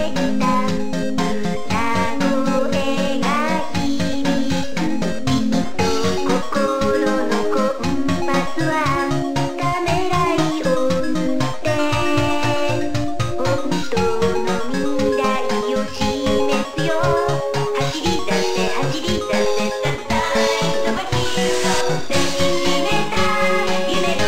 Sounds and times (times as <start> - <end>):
Funny music: 0.0 - 24.2
Video game music: 0.1 - 24.2.